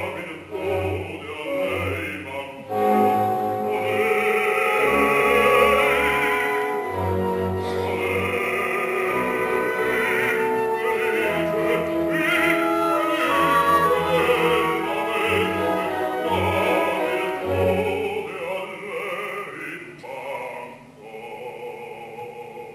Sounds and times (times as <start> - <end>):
Choir: 0.0 - 22.7
Opera: 0.0 - 22.7.